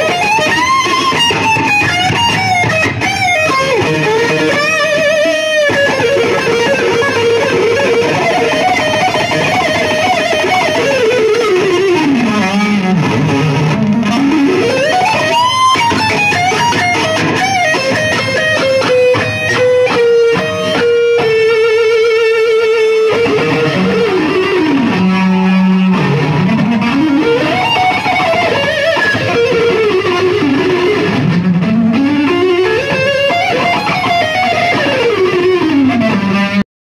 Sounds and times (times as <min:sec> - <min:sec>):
Bass guitar: 0:00.0 - 0:36.6.